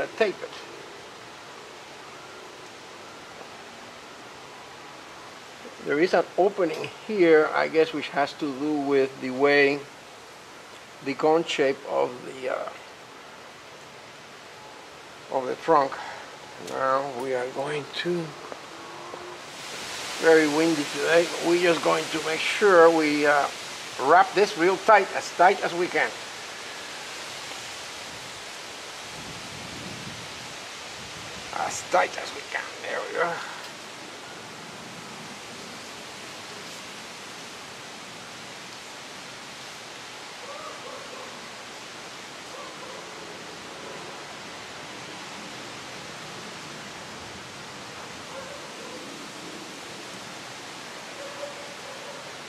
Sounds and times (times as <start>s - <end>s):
Speech: 0.0s - 0.6s, 5.8s - 9.9s, 11.0s - 12.8s, 15.3s - 18.4s, 20.2s - 26.2s, 31.5s - 33.6s
Outside, rural or natural: 0.0s - 52.4s
Pink noise: 0.0s - 52.4s.